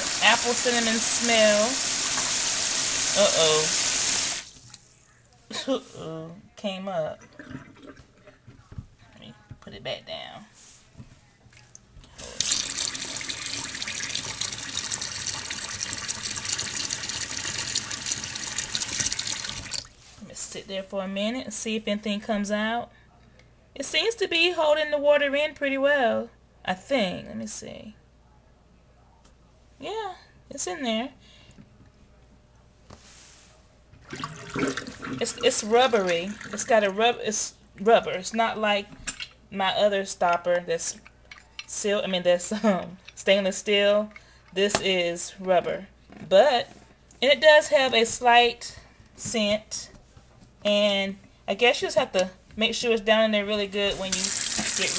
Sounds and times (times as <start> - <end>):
Sink (filling or washing): 0.0 - 4.8, 12.2 - 20.0, 34.0 - 37.0, 53.8 - 54.9
Water tap, faucet: 0.0 - 4.8, 12.2 - 20.0, 34.0 - 36.9, 53.9 - 54.9
Bathtub (filling or washing): 0.0 - 6.0, 6.7 - 8.9, 11.5 - 20.2, 34.0 - 48.4, 51.6 - 54.9.